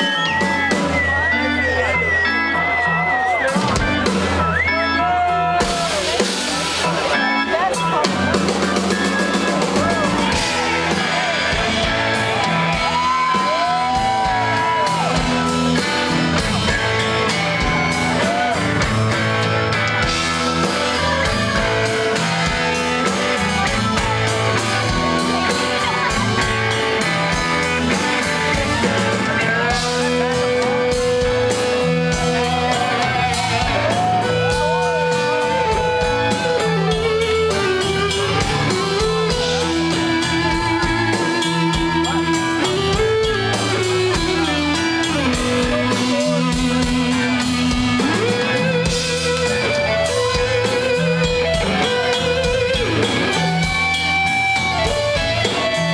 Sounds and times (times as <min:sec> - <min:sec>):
Blues: 0:00.0 - 0:55.9
Exciting music: 0:00.0 - 0:55.9.